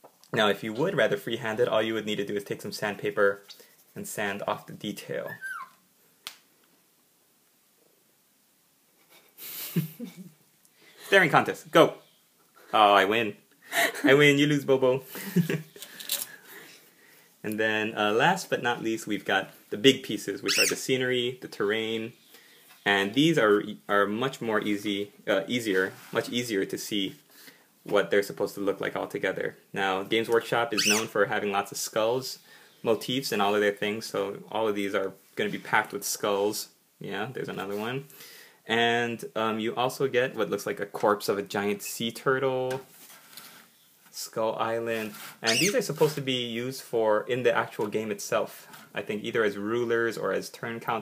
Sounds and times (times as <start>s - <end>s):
Inside, small room: 0.0s - 51.0s
Speech: 0.3s - 5.4s, 11.1s - 12.0s, 12.7s - 13.4s, 14.1s - 15.1s, 17.4s - 22.2s, 22.8s - 27.2s, 27.9s - 38.1s, 38.7s - 42.9s, 44.1s - 51.0s.